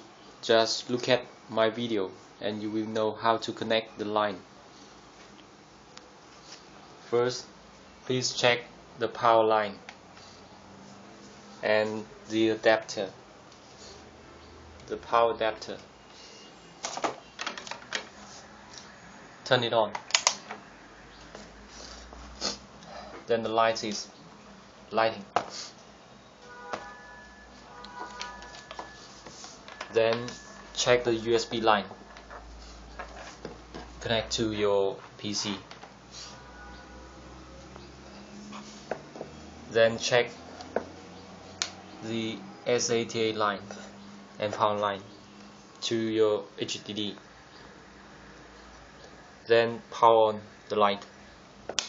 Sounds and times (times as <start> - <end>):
Speech: 0.4 - 4.4, 7.1 - 7.5, 8.1 - 9.8, 11.6 - 13.2, 14.9 - 15.9, 19.5 - 20.0, 23.3 - 24.2, 24.9 - 25.3, 29.9 - 32.0, 34.0 - 35.7, 39.7 - 40.4, 42.0 - 45.1, 45.8 - 47.2, 49.5 - 51.1.